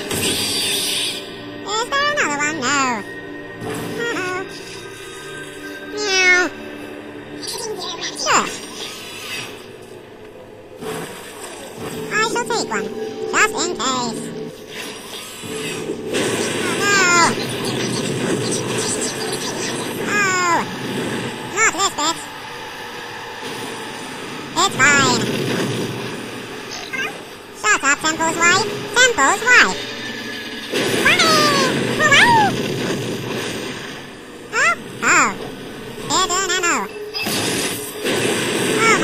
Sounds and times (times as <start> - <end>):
Speech: 1.7 - 3.1, 12.1 - 14.3, 16.7 - 17.4, 20.1 - 20.7, 21.6 - 22.2, 24.6 - 25.2, 27.0 - 29.8, 31.0 - 32.6, 34.6 - 35.4, 36.1 - 36.9, 38.8 - 39.0.